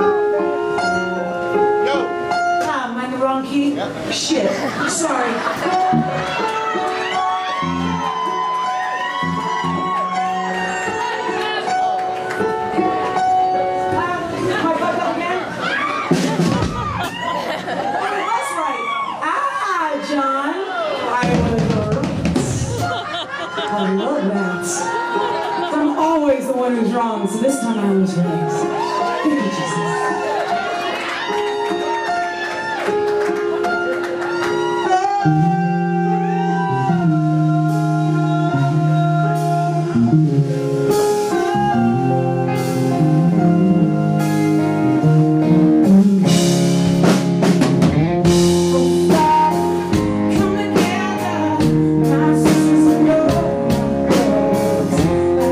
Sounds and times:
Music: 0:00.0 - 0:18.0, 0:20.0 - 0:55.5.

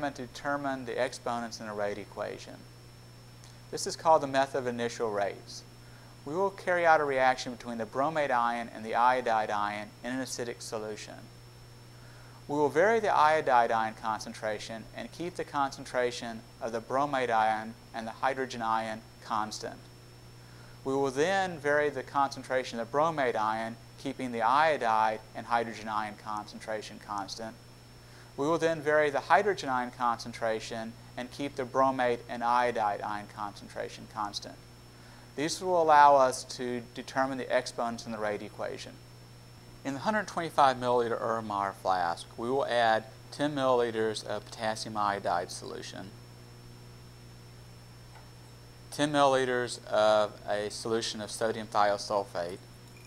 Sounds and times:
Speech: 0:00.0 - 0:02.6, 0:03.7 - 0:05.7, 0:06.3 - 0:11.3, 0:12.5 - 0:19.9, 0:20.9 - 0:27.6, 0:28.4 - 0:34.6, 0:35.4 - 0:39.0, 0:39.9 - 0:46.2, 0:49.0 - 0:52.6.

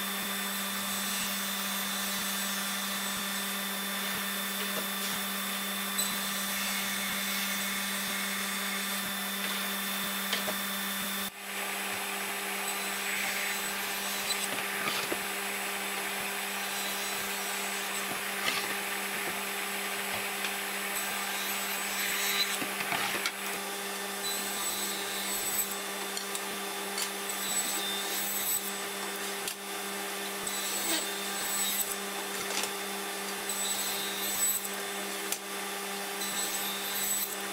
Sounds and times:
Tools: 0:06.0 - 0:06.2, 0:24.2 - 0:29.6, 0:36.2 - 0:37.4
Wood: 0:13.9 - 0:15.4, 0:16.8 - 0:20.6, 0:22.2 - 0:23.5.

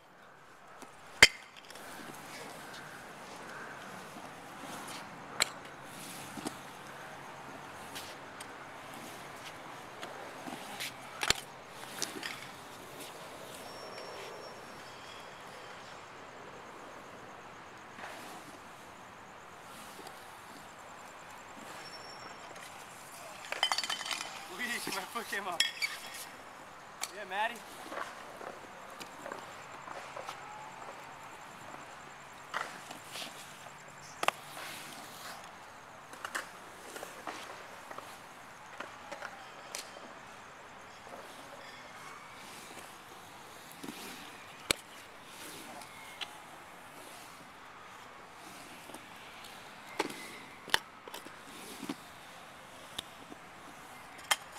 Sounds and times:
Skateboard: 0:00.8 - 0:07.0, 0:07.7 - 0:15.8, 0:22.6 - 0:26.4, 0:27.6 - 0:47.5, 0:48.4 - 0:54.5
Speech: 0:24.5 - 0:25.6, 0:27.1 - 0:27.6.

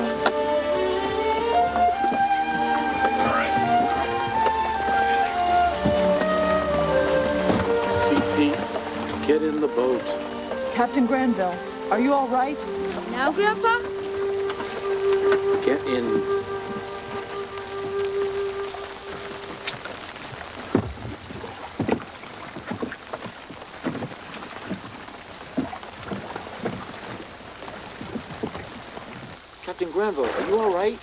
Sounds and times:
Music: 0:00.0 - 0:20.0.

